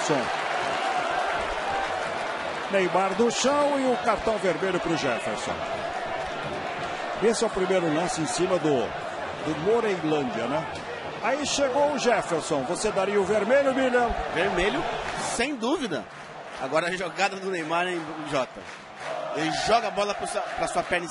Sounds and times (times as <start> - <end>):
Speech: 2.7 - 5.6, 7.2 - 8.9, 9.5 - 10.6, 11.2 - 18.6, 19.4 - 21.1.